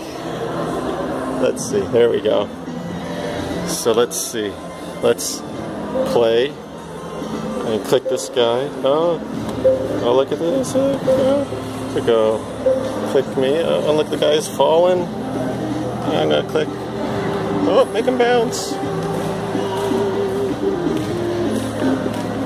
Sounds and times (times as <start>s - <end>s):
Music: 0.0s - 22.4s.